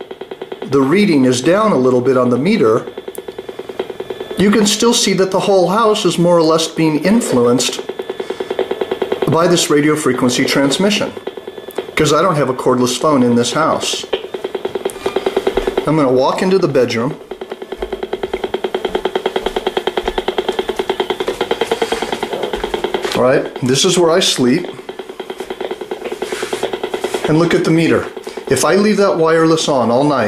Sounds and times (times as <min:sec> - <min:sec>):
Speech: 0:00.7 - 0:02.9, 0:04.4 - 0:07.8, 0:09.3 - 0:11.2, 0:12.0 - 0:14.1, 0:15.8 - 0:17.2, 0:23.2 - 0:24.8, 0:27.3 - 0:30.2.